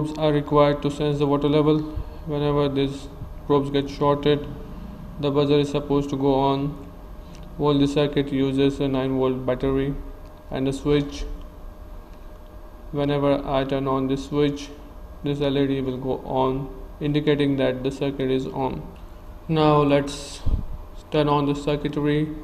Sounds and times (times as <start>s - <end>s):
Speech: 0.0s - 4.6s, 5.2s - 6.8s, 7.6s - 11.4s, 13.0s - 18.9s, 19.5s - 22.4s.